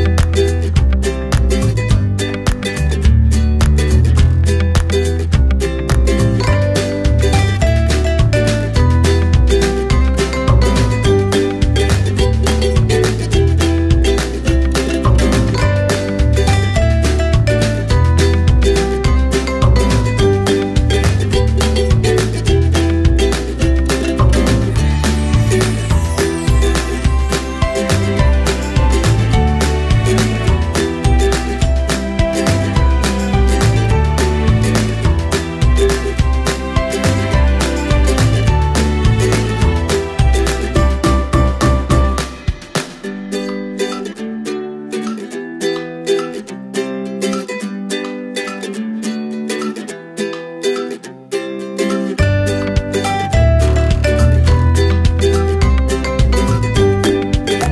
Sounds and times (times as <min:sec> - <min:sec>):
Music: 0:00.0 - 0:57.7.